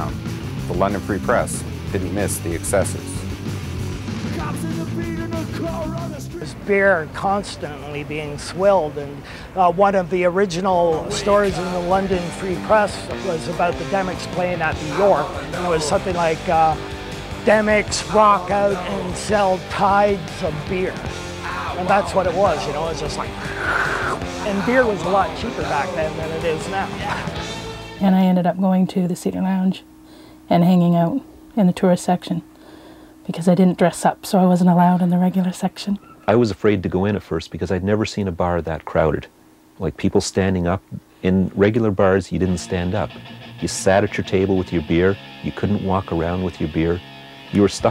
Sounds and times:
Music: 0.0 - 28.4, 42.4 - 47.9
Speech: 4.4 - 16.8, 33.3 - 47.9.

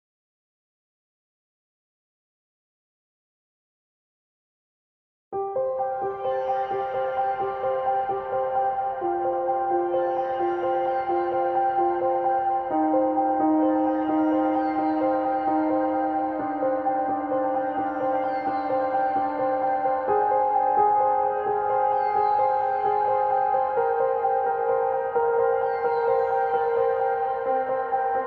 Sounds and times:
Music: 5.4 - 28.2.

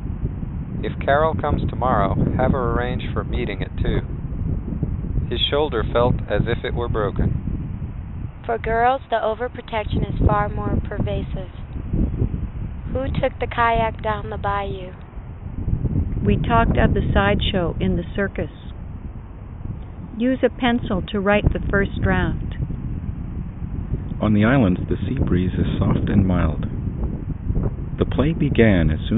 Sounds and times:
Wind noise (microphone): 0.0 - 29.1.

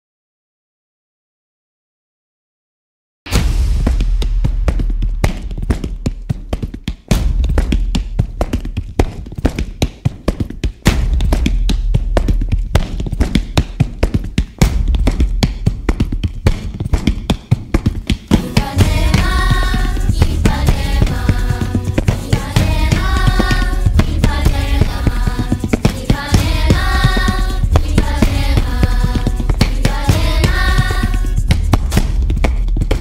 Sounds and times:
Music: 3.3 - 33.0.

